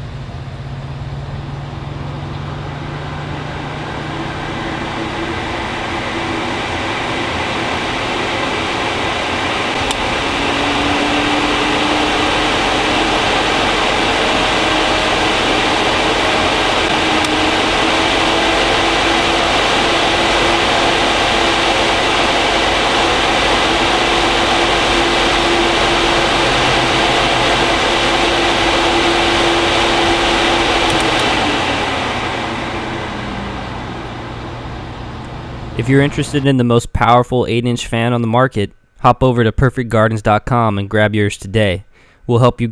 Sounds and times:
Mechanical fan: 0.0s - 37.0s.

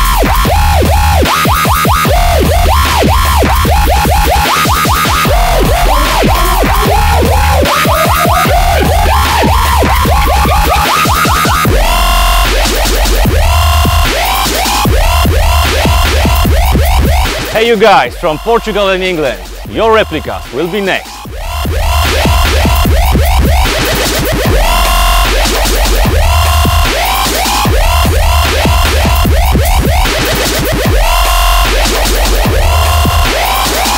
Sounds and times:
Music: 0.0s - 33.9s
Speech: 17.6s - 21.0s.

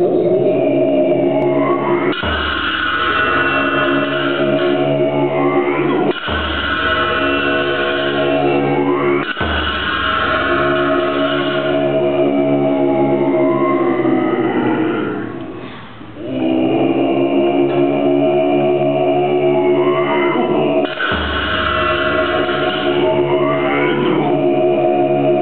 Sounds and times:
Music: 0.0s - 25.4s.

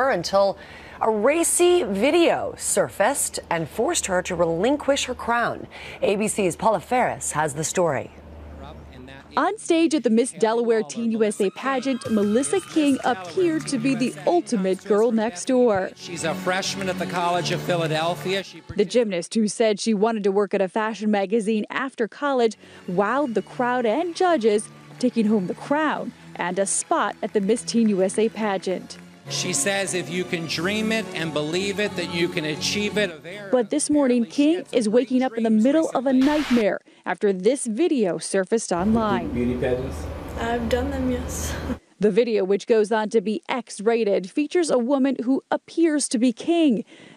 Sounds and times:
Music: 0.0s - 5.6s, 11.2s - 19.3s, 22.4s - 36.6s, 38.8s - 41.8s
Speech: 1.0s - 28.8s, 29.4s - 46.8s.

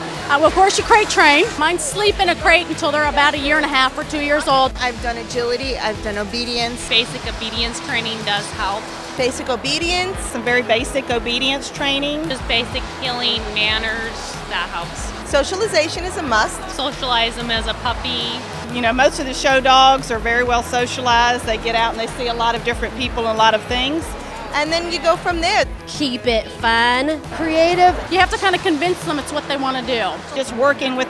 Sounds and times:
Music: 0.0s - 31.0s.

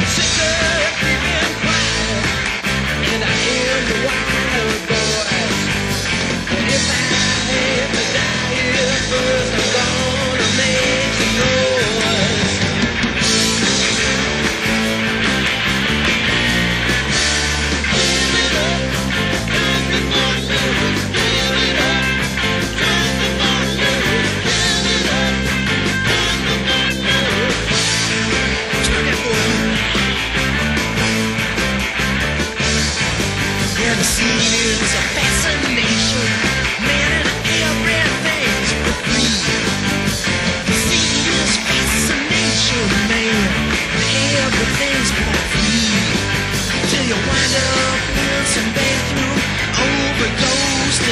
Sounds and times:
Psychedelic rock: 0.0s - 51.1s.

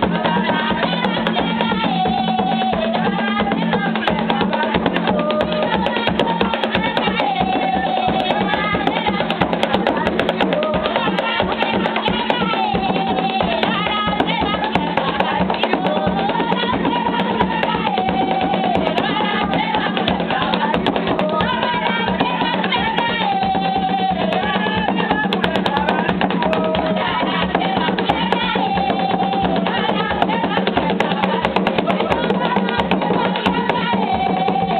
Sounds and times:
Female singing: 0.0s - 34.7s
Music: 0.0s - 34.7s.

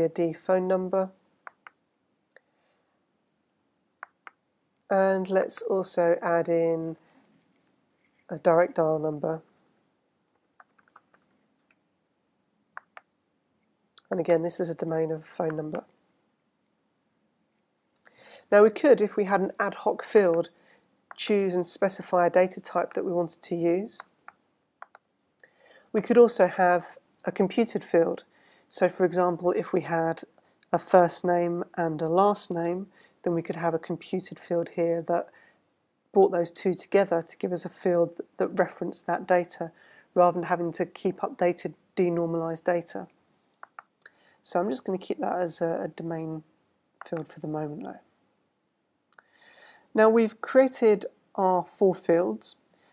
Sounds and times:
Typing: 10.3s - 11.4s.

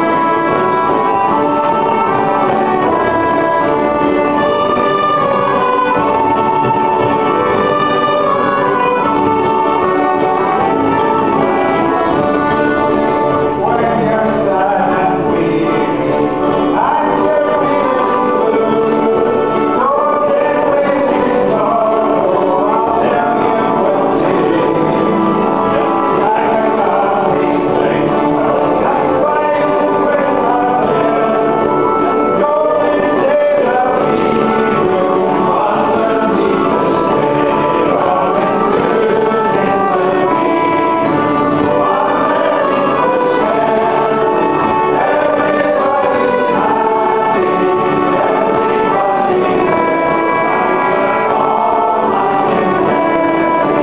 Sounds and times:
Violin, fiddle: 0.0s - 53.8s.

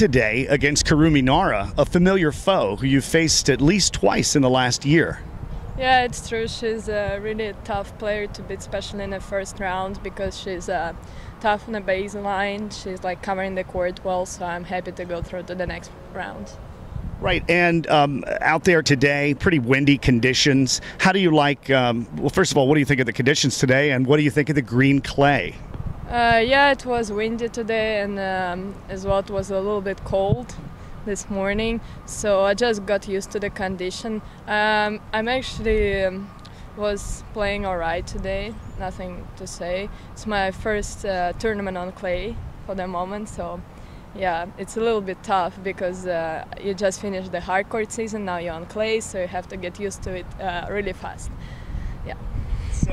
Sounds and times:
Speech: 5.8s - 16.5s, 17.2s - 36.2s, 44.2s - 51.3s.

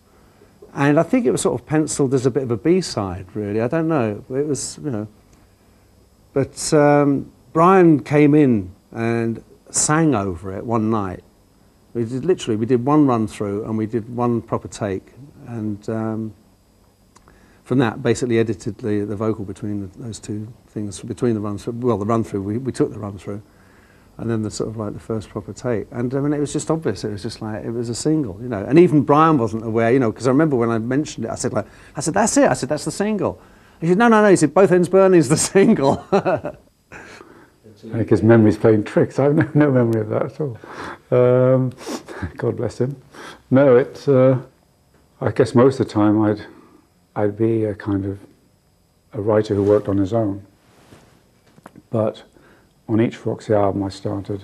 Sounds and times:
Speech: 0.7s - 5.2s, 6.3s - 11.3s, 12.0s - 16.4s, 17.6s - 23.5s, 24.2s - 36.4s, 37.6s - 44.5s, 45.2s - 46.6s, 47.2s - 48.3s, 49.1s - 50.5s, 51.9s - 52.3s, 52.9s - 54.4s.

